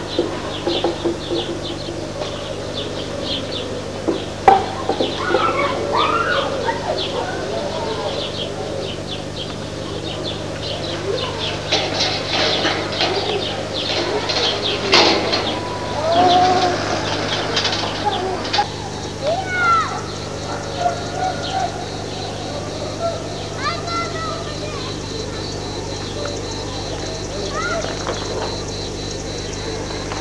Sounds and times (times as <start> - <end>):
Bird: 0.0 - 30.2.